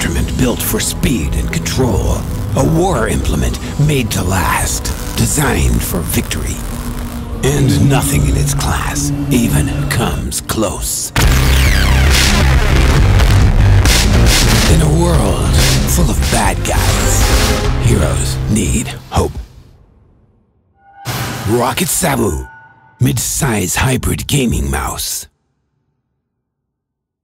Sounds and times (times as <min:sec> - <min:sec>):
Speech: 0:00.0 - 0:06.6, 0:07.4 - 0:11.2, 0:14.7 - 0:19.5, 0:21.4 - 0:25.3
Music: 0:00.0 - 0:24.2.